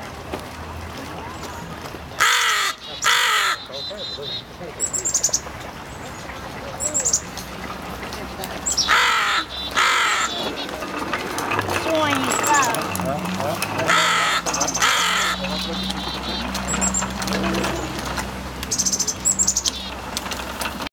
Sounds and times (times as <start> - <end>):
Speech: 0.9 - 2.2, 11.7 - 16.9
Caw: 2.2 - 4.2, 8.9 - 10.5, 13.9 - 16.0.